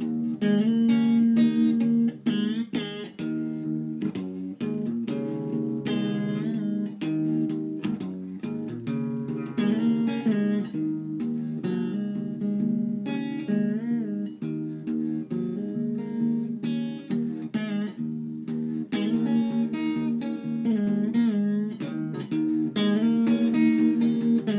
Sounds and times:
Strum: 0.1 - 24.5.

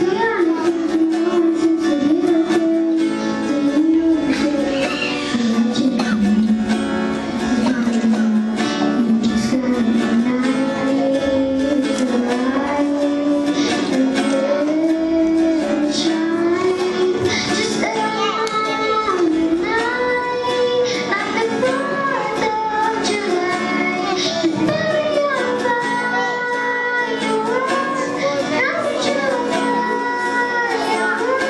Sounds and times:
Child singing: 0.0 - 6.7, 7.4 - 31.5
Music: 0.0 - 31.5.

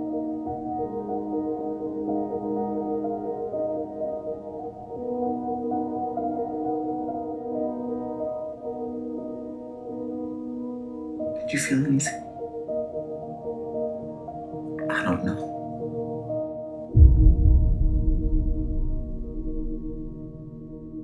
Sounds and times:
Music: 0.0 - 21.0
Speech: 11.4 - 12.2, 14.8 - 15.5.

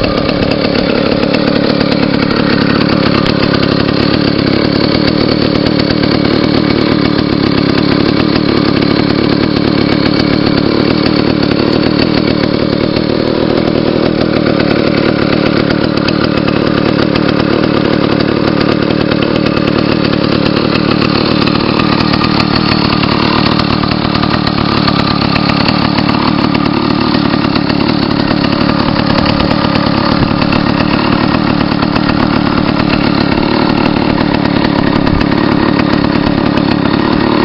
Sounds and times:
Vehicle: 0.0 - 37.4.

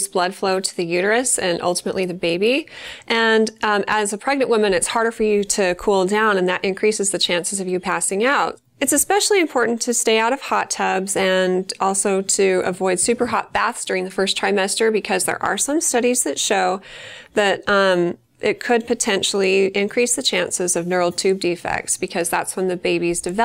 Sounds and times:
Speech: 0.0 - 16.8, 17.4 - 23.4.

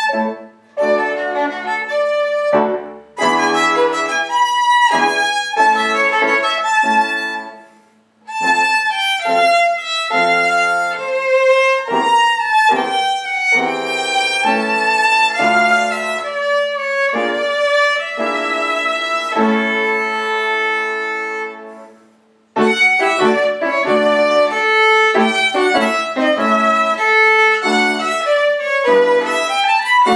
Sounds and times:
Violin, fiddle: 0.0 - 22.0, 22.6 - 30.1.

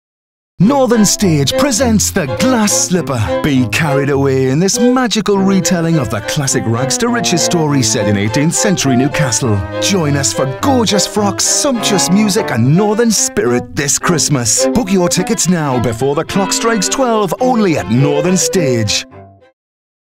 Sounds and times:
Speech: 0.6 - 19.1
Music: 0.6 - 19.6.

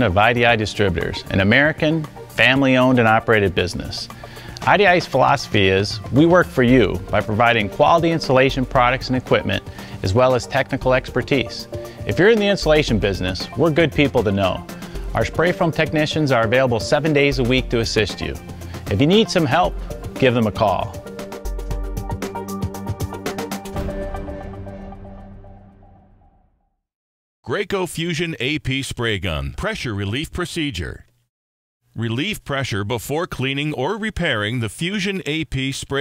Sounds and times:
Speech: 0.0 - 21.0, 27.4 - 31.1, 32.0 - 36.0
Music: 0.0 - 26.8.

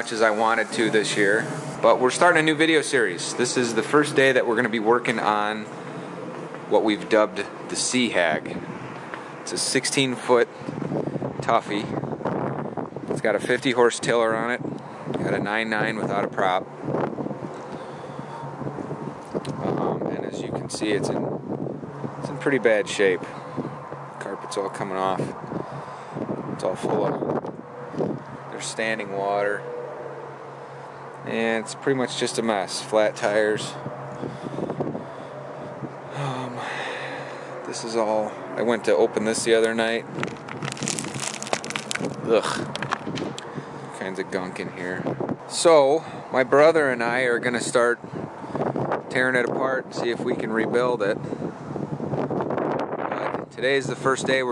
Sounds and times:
Speech: 0.0 - 5.7, 6.7 - 8.6, 9.5 - 10.5, 11.4 - 12.0, 13.2 - 14.6, 15.2 - 16.7, 19.6 - 21.2, 22.2 - 23.4, 24.2 - 25.4, 26.6 - 27.2, 28.5 - 29.6, 31.3 - 33.8, 36.2 - 36.8, 37.7 - 40.1, 42.2 - 42.7, 44.0 - 48.0, 49.1 - 51.2, 53.2 - 54.5.

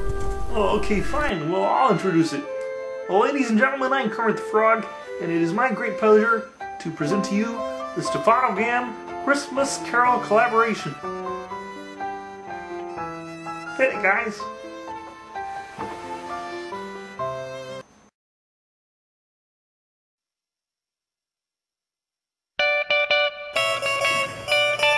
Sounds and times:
Music: 0.0 - 18.1, 22.6 - 24.9
Speech: 0.5 - 2.5, 3.1 - 11.0, 13.8 - 14.5.

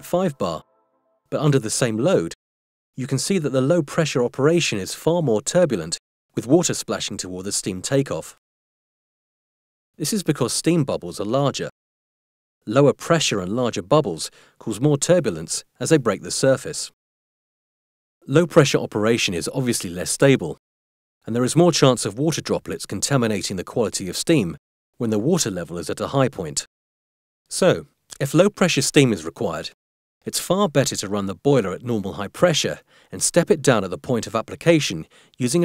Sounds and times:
Speech: 0.0 - 0.6, 1.3 - 2.4, 3.0 - 8.4, 10.0 - 11.8, 12.6 - 17.0, 18.2 - 20.6, 21.2 - 26.7, 27.5 - 35.6.

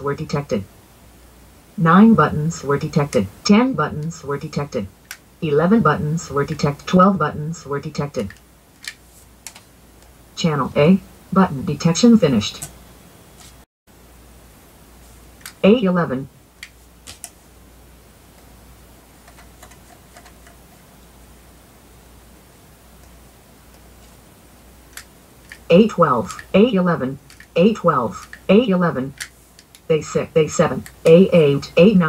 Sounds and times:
Speech: 0.0 - 0.7, 1.8 - 8.4, 10.4 - 12.7, 15.6 - 16.3, 25.7 - 29.2, 29.9 - 32.0.

